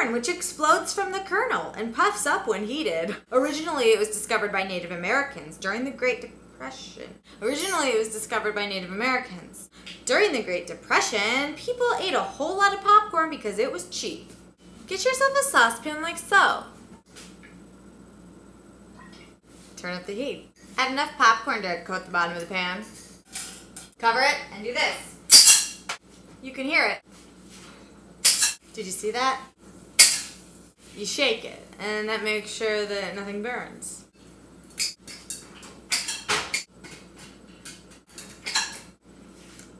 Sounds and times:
Speech: 0.0s - 14.3s, 14.9s - 16.7s, 19.8s - 22.9s, 24.0s - 25.2s, 26.4s - 27.0s, 28.7s - 29.5s, 31.0s - 34.1s.

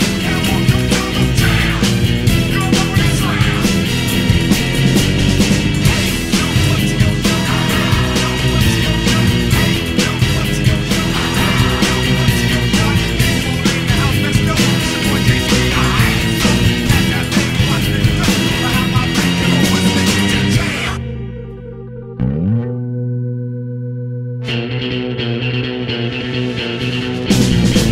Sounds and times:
Music: 0.0s - 27.9s.

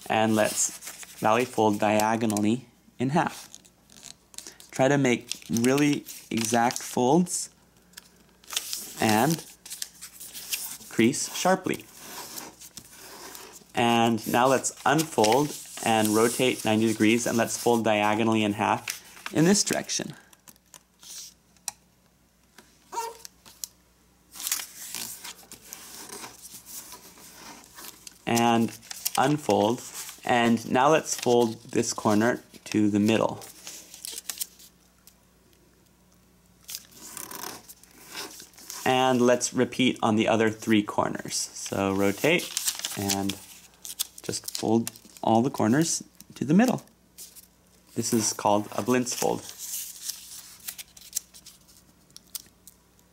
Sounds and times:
Speech: 0.0s - 3.4s, 4.7s - 7.5s, 9.0s - 9.4s, 10.9s - 11.8s, 13.8s - 20.2s, 28.3s - 33.4s, 38.8s - 43.4s, 44.3s - 46.9s, 48.0s - 49.5s
Inside, small room: 0.0s - 53.1s.

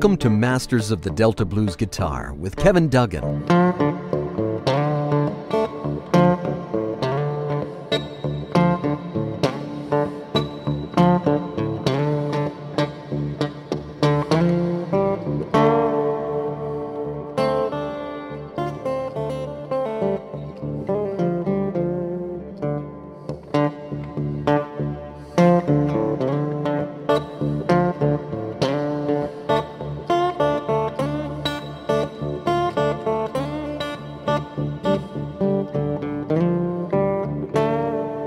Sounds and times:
Acoustic guitar: 0.0s - 38.2s
Strum: 0.0s - 38.2s.

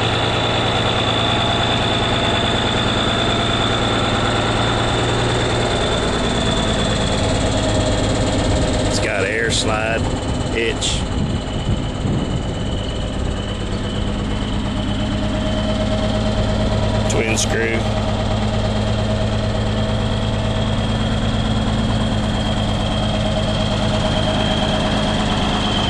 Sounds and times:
Vehicle: 0.0s - 25.8s
Speech: 8.9s - 11.1s, 17.1s - 17.9s.

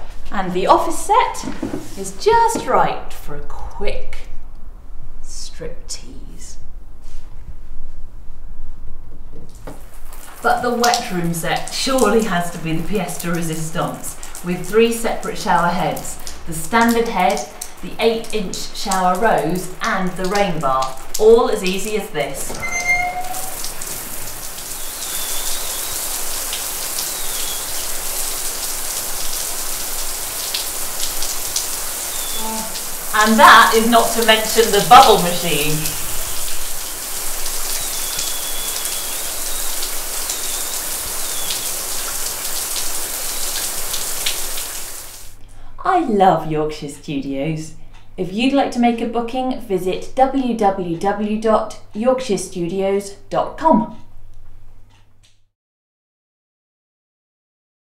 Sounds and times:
Rain on surface: 9.5s - 45.4s
Raindrop: 9.5s - 45.4s.

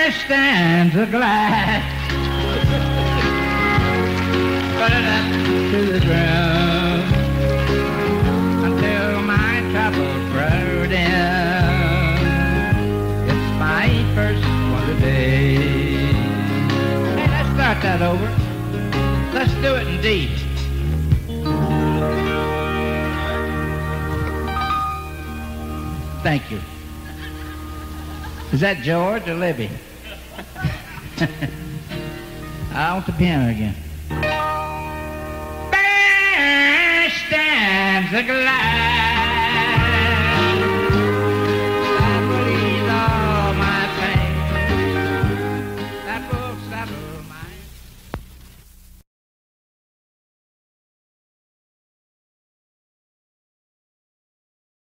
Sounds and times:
Music: 0.0s - 48.2s.

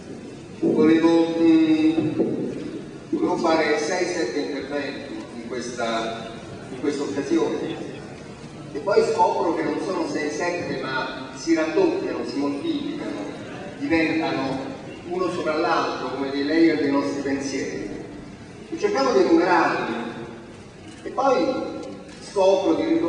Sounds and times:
Narration, monologue: 0.0s - 23.0s
Male speech, man speaking: 0.6s - 2.2s, 3.1s - 8.0s, 8.8s - 18.0s, 18.7s - 20.3s, 21.0s - 23.0s.

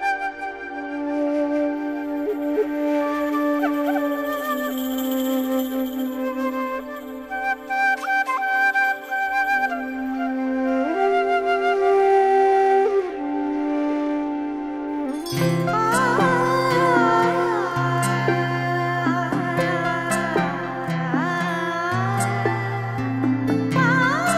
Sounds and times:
Tender music: 0.0s - 24.3s.

